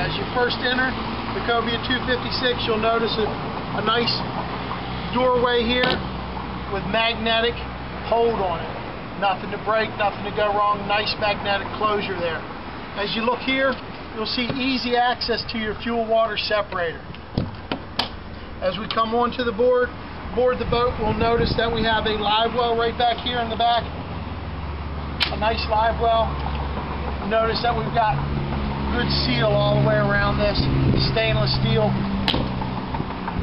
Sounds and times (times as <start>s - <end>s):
Speech: 0.0s - 4.2s, 5.1s - 6.0s, 6.7s - 12.4s, 13.0s - 17.0s, 18.6s - 23.9s, 25.3s - 26.3s, 27.2s - 28.2s, 28.9s - 32.0s
Vehicle: 0.0s - 33.4s.